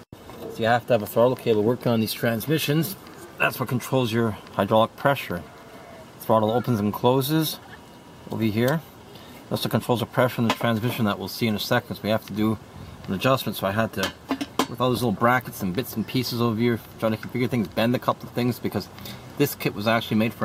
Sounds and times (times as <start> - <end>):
Speech: 0.4 - 5.5, 6.2 - 7.7, 8.3 - 8.9, 9.5 - 20.4.